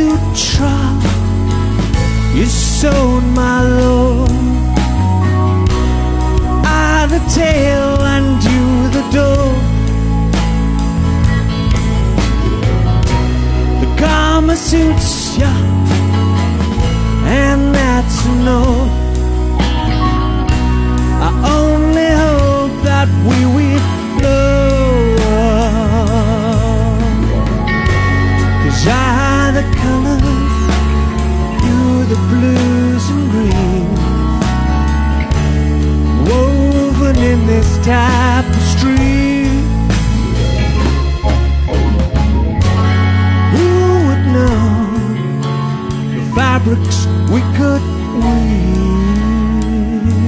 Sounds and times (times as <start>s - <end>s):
Music: 0.0s - 50.2s.